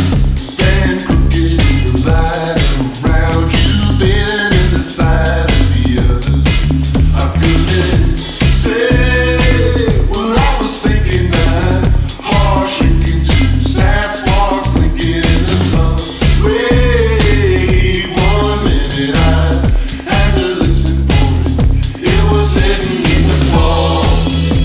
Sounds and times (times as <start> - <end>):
Singing: 0.0 - 6.3, 7.1 - 24.6
Music: 0.0 - 24.6.